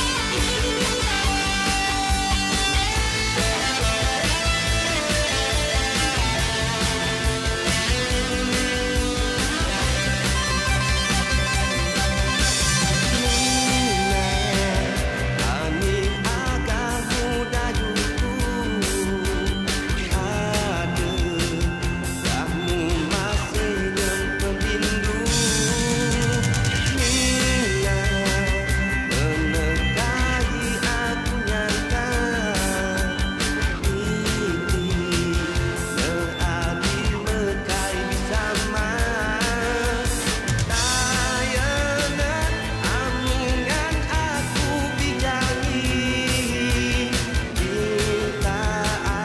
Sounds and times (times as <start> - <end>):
Music: 0.0 - 49.2.